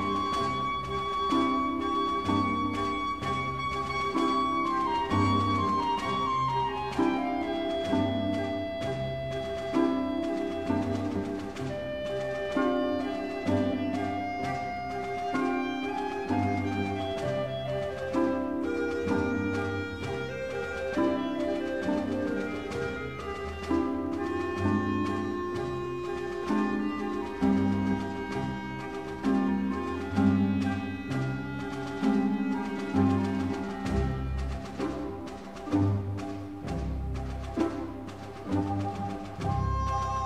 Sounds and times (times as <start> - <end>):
Classical music: 0.0 - 40.2.